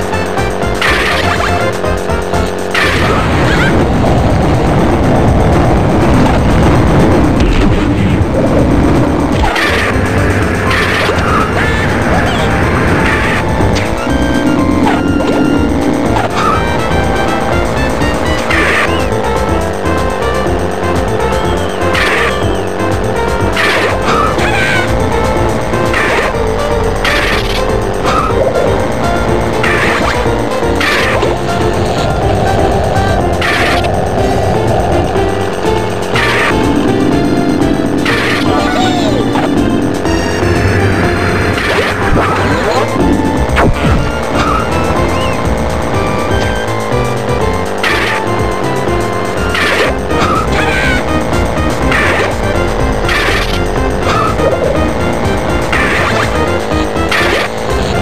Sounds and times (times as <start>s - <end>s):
Music: 0.0s - 58.0s.